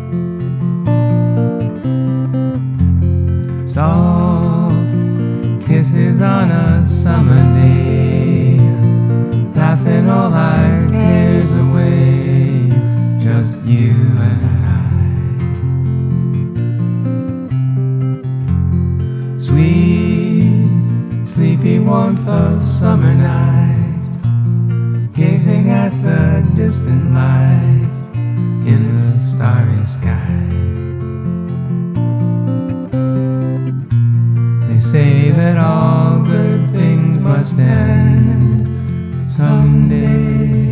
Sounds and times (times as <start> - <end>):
Guitar: 0.0 - 40.7.